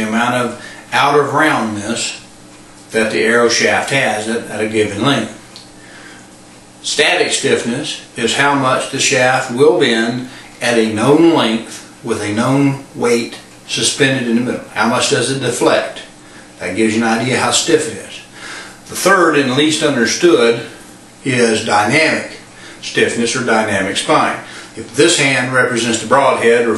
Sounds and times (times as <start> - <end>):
Speech: 0.0 - 2.3, 2.9 - 5.4, 6.8 - 18.3, 18.9 - 26.7.